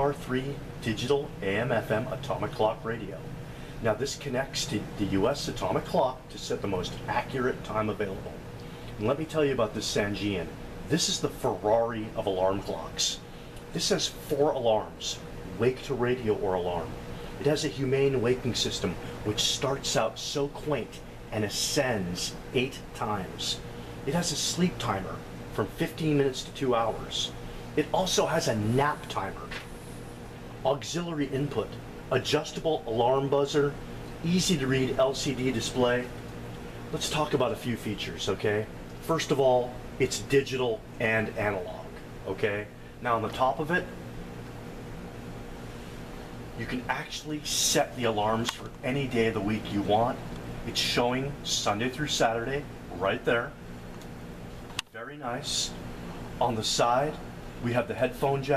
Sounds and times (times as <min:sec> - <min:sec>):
Speech: 0:00.0 - 0:29.6, 0:30.6 - 0:36.2, 0:36.9 - 0:44.0, 0:46.6 - 0:53.6, 0:54.9 - 0:55.8, 0:56.4 - 0:58.5.